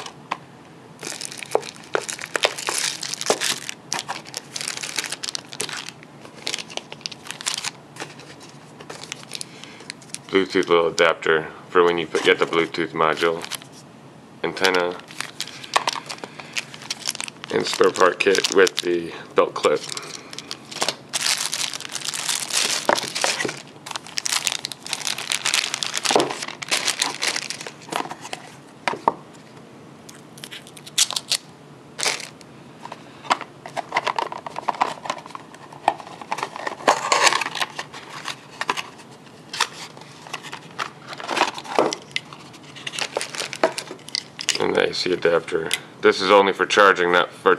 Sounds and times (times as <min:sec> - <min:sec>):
Crumpling, crinkling: 0:01.0 - 0:11.0, 0:13.2 - 0:13.8, 0:14.6 - 0:19.0, 0:19.6 - 0:28.6, 0:30.1 - 0:32.4, 0:33.7 - 0:44.6
Speech: 0:10.3 - 0:13.5, 0:14.4 - 0:15.0, 0:17.5 - 0:19.9, 0:44.6 - 0:47.5.